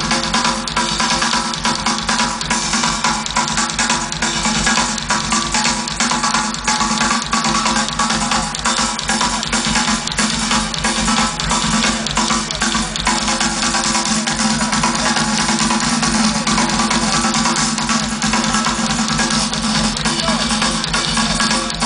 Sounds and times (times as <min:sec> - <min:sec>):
Bass drum: 0:00.0 - 0:21.8
Drum kit: 0:00.0 - 0:21.8.